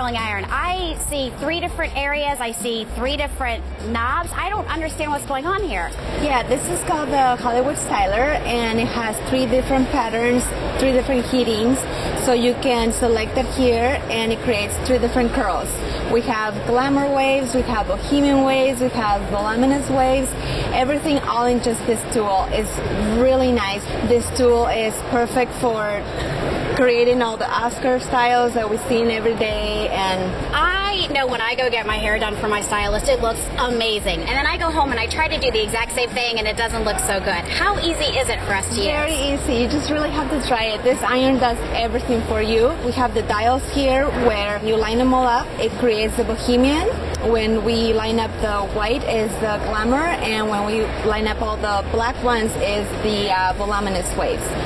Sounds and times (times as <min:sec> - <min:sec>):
Music: 0:00.0 - 0:54.6.